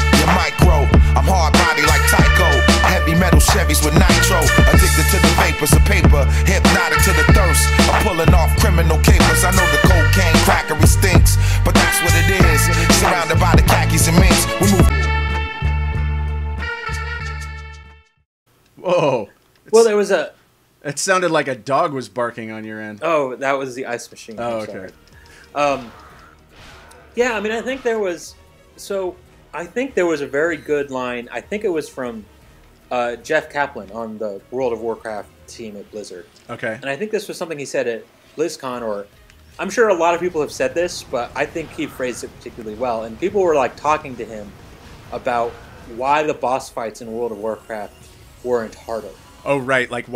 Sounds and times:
Speech: 0:18.8 - 0:25.0, 0:25.6 - 0:25.9, 0:27.2 - 0:32.3, 0:32.9 - 0:50.1.

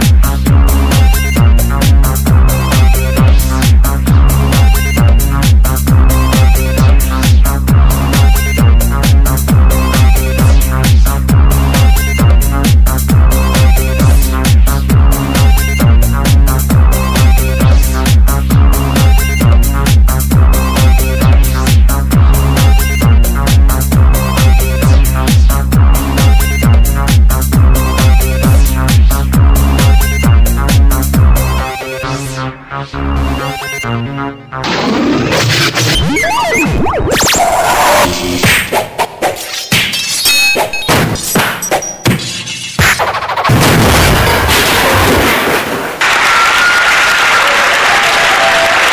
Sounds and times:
Electronic music: 0:00.0 - 0:44.9.

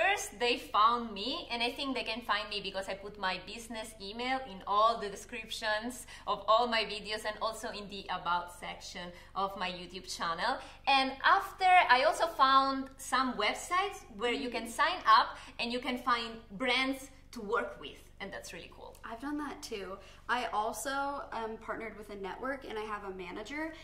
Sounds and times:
Speech: 0:00.0 - 0:23.8.

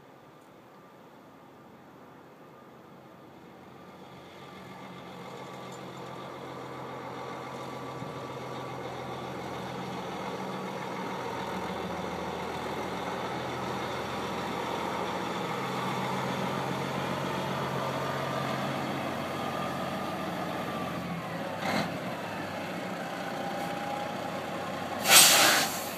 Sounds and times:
Outside, rural or natural: 0:00.0 - 0:25.9
Truck: 0:00.0 - 0:25.9.

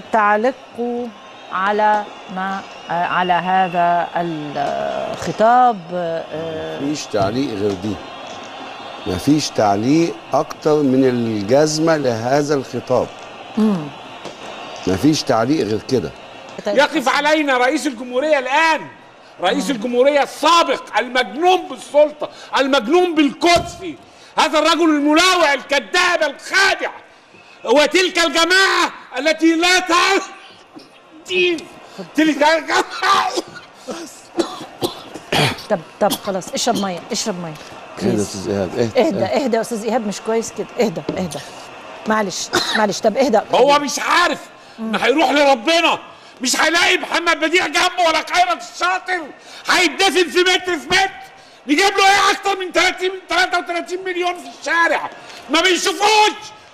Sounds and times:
Conversation: 0:00.0 - 0:56.7
Male speech, man speaking: 0:06.6 - 0:08.0, 0:09.0 - 0:13.1, 0:14.8 - 0:27.0, 0:27.7 - 0:30.4, 0:31.2 - 0:33.5, 0:38.0 - 0:39.5, 0:43.2 - 0:56.6.

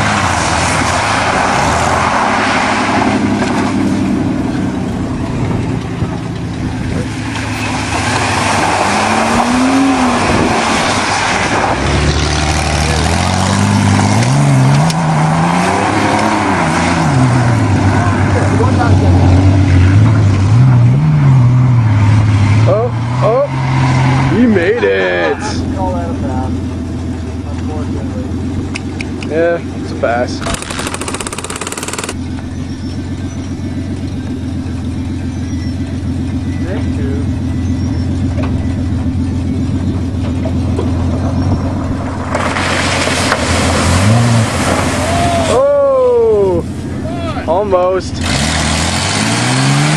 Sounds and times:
Car: 0:00.0 - 0:49.9
Truck: 0:00.0 - 0:49.9.

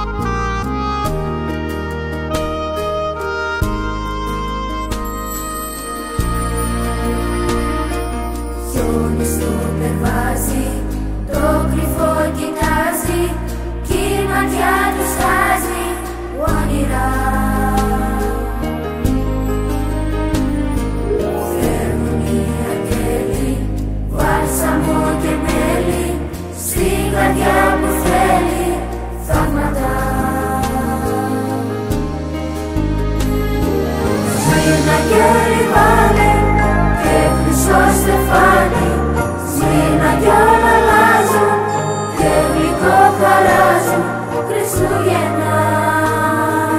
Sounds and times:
Christmas music: 0:00.0 - 0:46.7.

